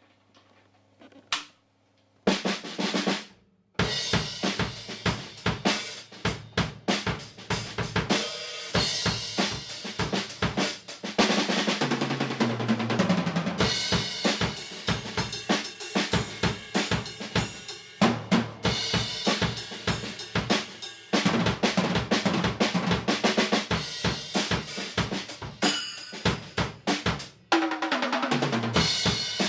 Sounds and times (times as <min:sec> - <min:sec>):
Drum kit: 0:02.3 - 0:29.4.